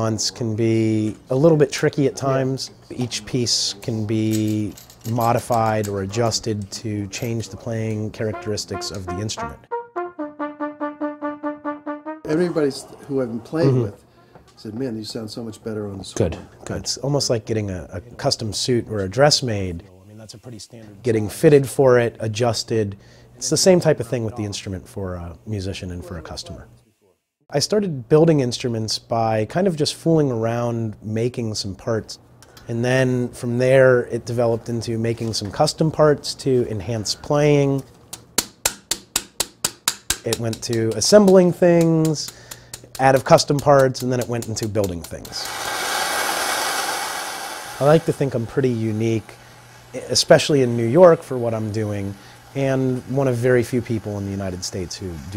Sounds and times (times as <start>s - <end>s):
Trumpet: 8.1s - 12.7s.